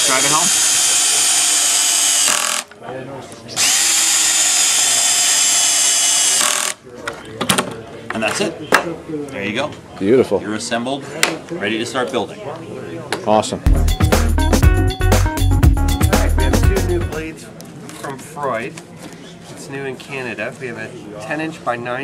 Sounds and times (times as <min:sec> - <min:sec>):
Music: 0:13.7 - 0:17.3.